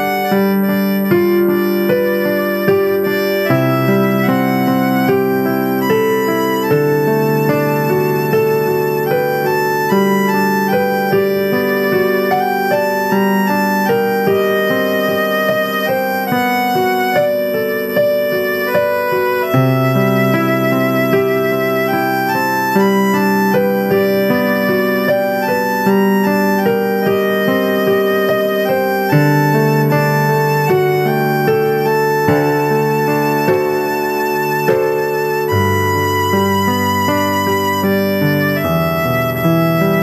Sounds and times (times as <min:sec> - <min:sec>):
Violin, fiddle: 0:00.0 - 0:40.0.